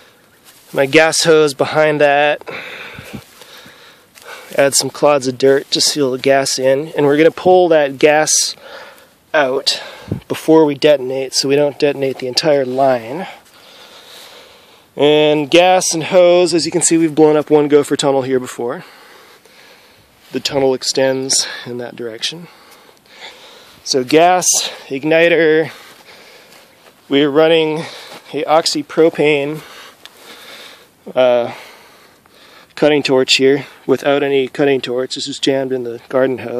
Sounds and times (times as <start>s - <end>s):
Speech: 0.7s - 2.4s, 4.5s - 8.6s, 9.4s - 13.4s, 15.0s - 18.9s, 20.3s - 22.5s, 23.8s - 25.8s, 27.1s - 29.6s, 31.1s - 31.6s, 32.8s - 36.5s.